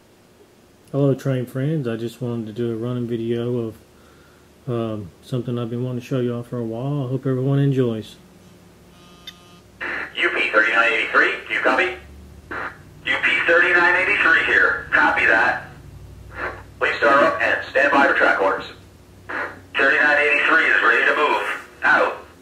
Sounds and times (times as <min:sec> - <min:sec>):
Speech: 0:00.9 - 0:03.8, 0:04.6 - 0:08.2, 0:10.2 - 0:12.1, 0:13.0 - 0:15.8, 0:16.4 - 0:18.8, 0:19.8 - 0:22.4.